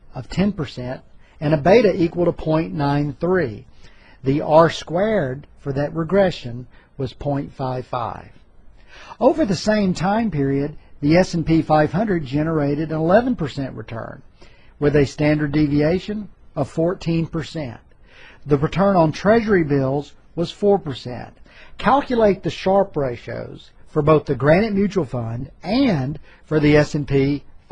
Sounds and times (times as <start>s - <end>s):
Speech: 0.1s - 8.4s, 9.1s - 27.7s.